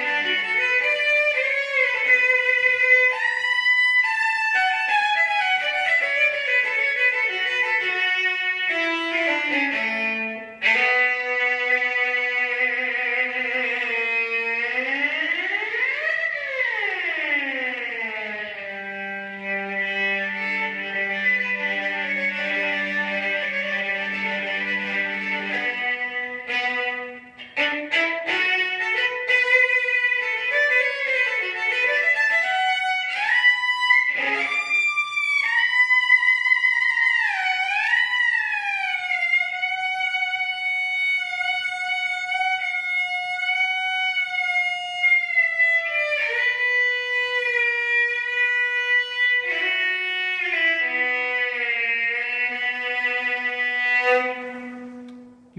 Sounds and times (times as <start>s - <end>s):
Violin, fiddle: 0.0s - 55.5s.